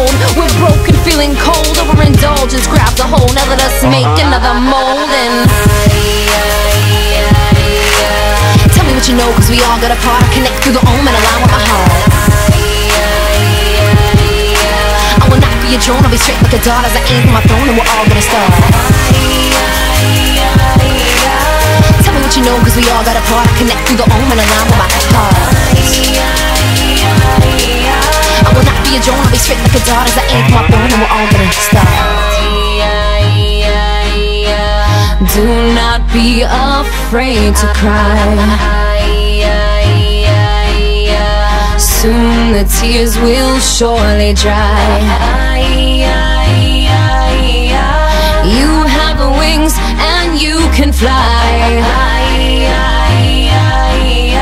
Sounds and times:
Dubstep: 0.0s - 54.4s.

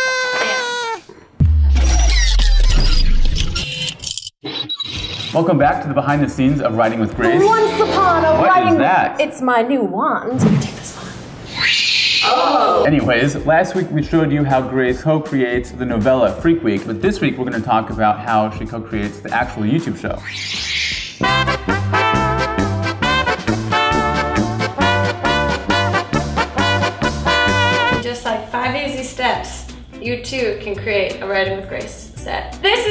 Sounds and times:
Music: 5.4s - 8.9s, 12.9s - 32.9s
Speech: 5.4s - 10.5s, 12.3s - 20.2s.

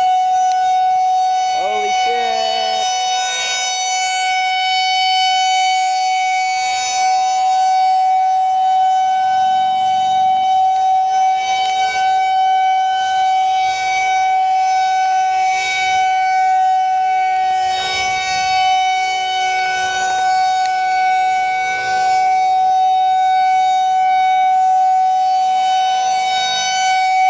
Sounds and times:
Civil defense siren: 0.0s - 27.3s.

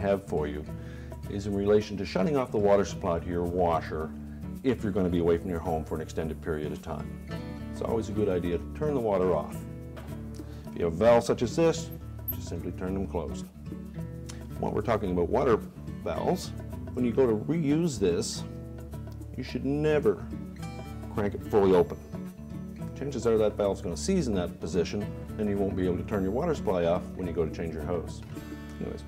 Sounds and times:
Speech: 0.0s - 0.7s, 1.3s - 7.1s, 7.8s - 9.6s, 10.8s - 13.5s, 14.6s - 18.5s, 19.4s - 20.3s, 21.1s - 22.0s, 23.0s - 29.0s
Music: 0.0s - 29.0s.

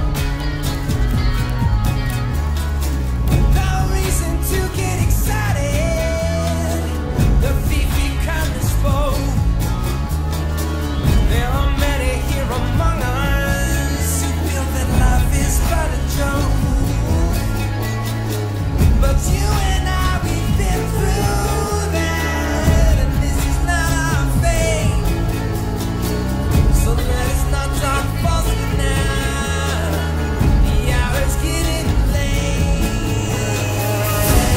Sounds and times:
Singing: 0.0s - 34.5s.

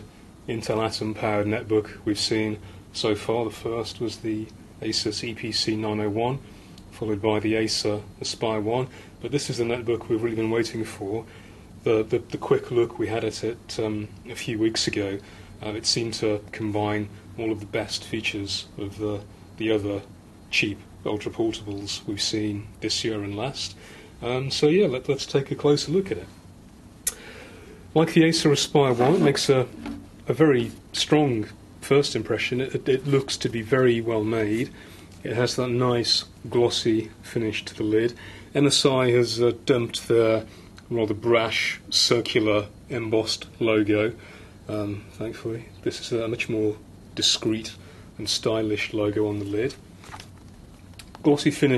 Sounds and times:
Speech: 0.0s - 26.4s, 28.0s - 49.8s, 51.2s - 51.7s.

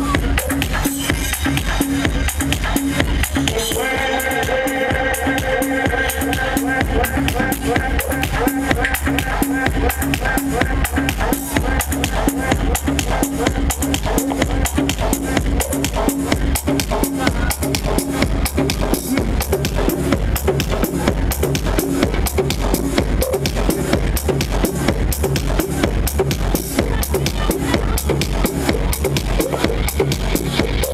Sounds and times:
Techno: 0.0s - 30.9s.

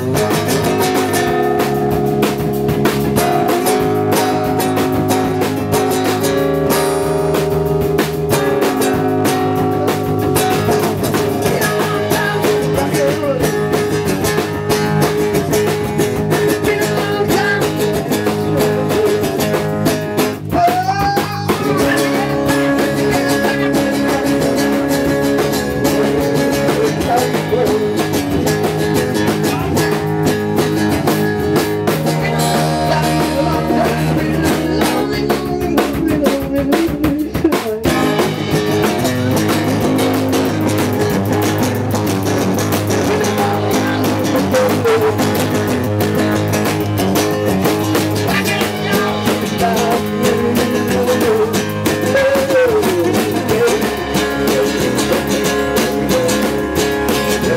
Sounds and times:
Rock and roll: 0.0s - 57.5s.

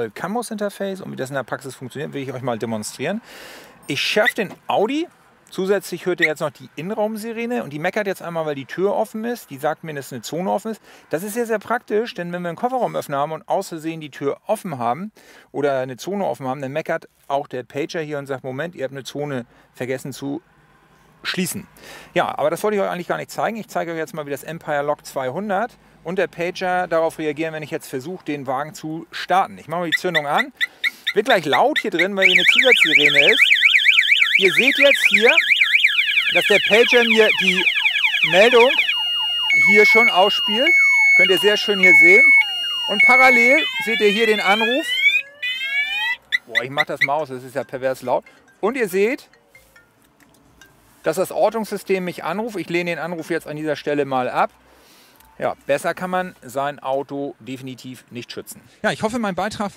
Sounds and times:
Speech: 0.0s - 3.2s, 3.9s - 20.4s, 21.2s - 30.5s, 31.2s - 33.4s, 34.4s - 35.4s, 36.3s - 38.8s, 39.6s - 42.3s, 42.9s - 44.9s, 46.5s - 49.3s, 51.1s - 54.5s, 55.4s - 59.7s.

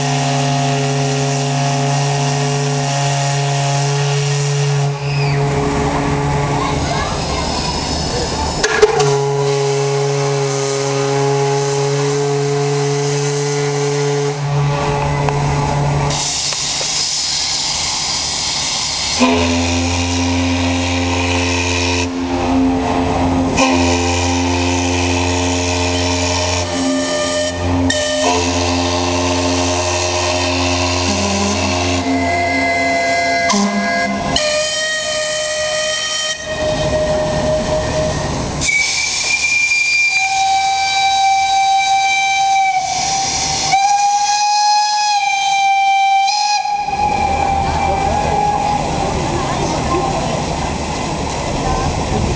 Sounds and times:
Steam whistle: 0.0s - 6.5s, 8.6s - 15.3s, 18.4s - 49.1s
Hiss: 16.1s - 19.4s, 38.6s - 45.6s.

